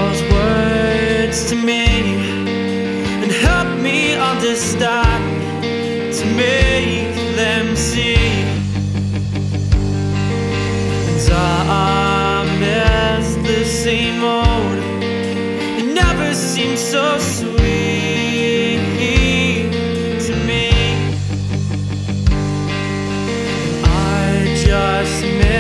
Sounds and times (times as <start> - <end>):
Theme music: 2.5 - 13.4, 19.6 - 25.4.